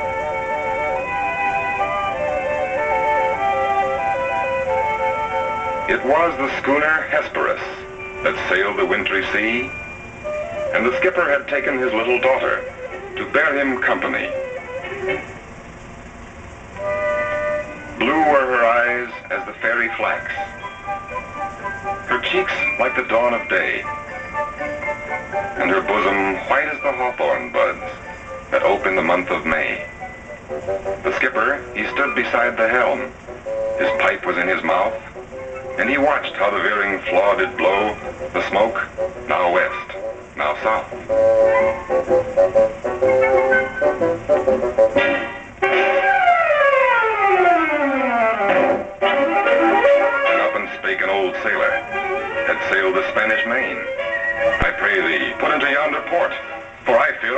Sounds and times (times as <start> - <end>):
Music: 0.0 - 57.3
Speech: 5.9 - 9.7, 10.8 - 12.6, 13.2 - 14.4, 18.0 - 20.5, 22.1 - 23.9, 25.6 - 27.9, 28.6 - 29.9, 31.1 - 33.1, 33.8 - 35.1, 35.8 - 40.9, 50.3 - 51.8, 52.4 - 53.9, 54.6 - 57.3.